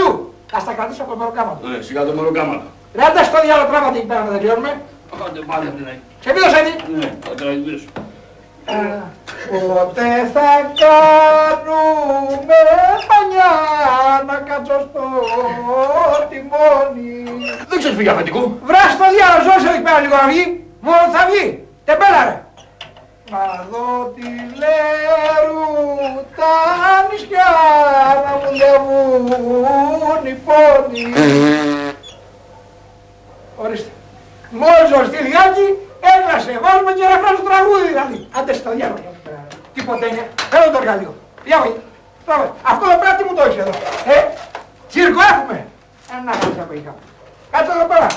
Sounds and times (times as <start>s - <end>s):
Speech: 0.0s - 8.0s, 8.7s - 22.5s, 23.3s - 31.2s, 33.6s - 48.1s
Inside, small room: 0.0s - 48.1s.